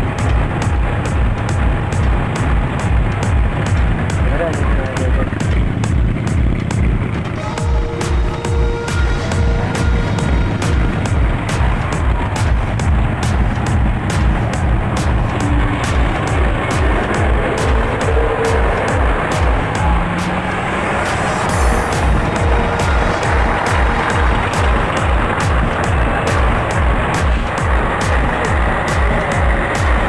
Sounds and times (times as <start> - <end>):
Car: 0.0 - 30.0
Music: 0.0 - 30.0
Truck: 0.0 - 30.0.